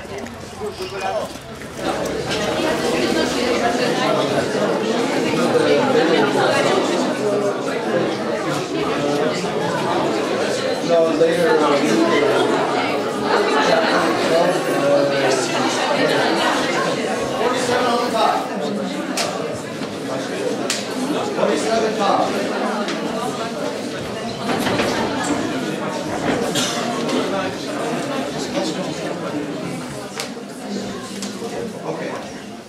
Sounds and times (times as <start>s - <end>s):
Speech: 0.0s - 32.6s.